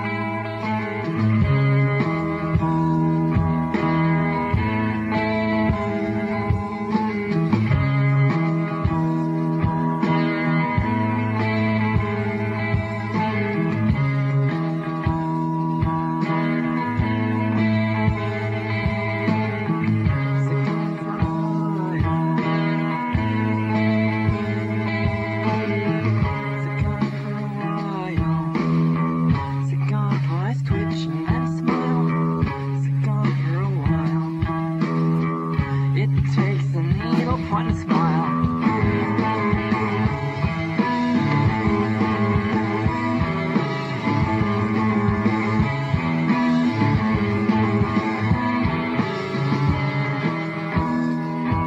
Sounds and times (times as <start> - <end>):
Music: 0.0 - 51.6.